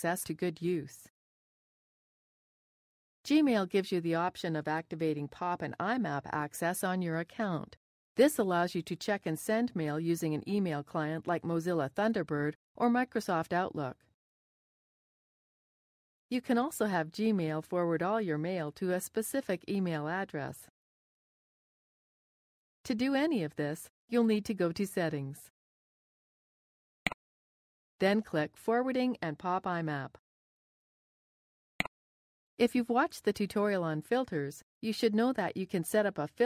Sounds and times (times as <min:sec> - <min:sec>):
Speech: 0:00.0 - 0:01.1, 0:03.3 - 0:14.0, 0:16.3 - 0:20.7, 0:22.9 - 0:25.5, 0:28.0 - 0:30.2, 0:32.6 - 0:36.4.